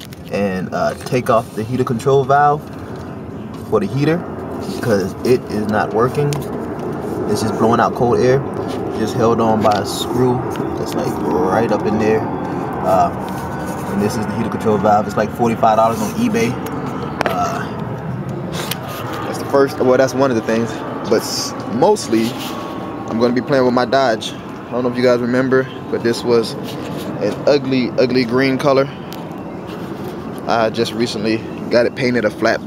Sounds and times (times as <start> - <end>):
Speech: 0.3 - 2.6, 3.7 - 6.4, 7.3 - 12.2, 12.8 - 13.2, 13.9 - 16.6, 17.3 - 17.7, 19.3 - 22.4, 23.1 - 26.6, 27.2 - 29.0, 30.5 - 32.6.